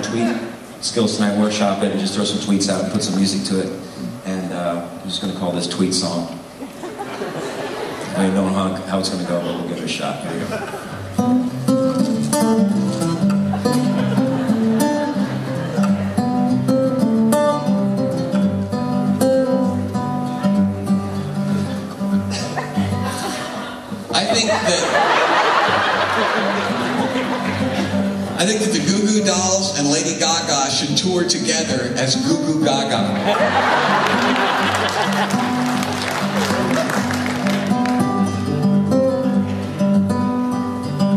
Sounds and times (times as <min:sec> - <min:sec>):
Speech: 0:00.0 - 0:06.4, 0:08.1 - 0:10.6, 0:24.1 - 0:25.0, 0:28.4 - 0:33.2
Music: 0:10.9 - 0:24.1, 0:26.0 - 0:41.1.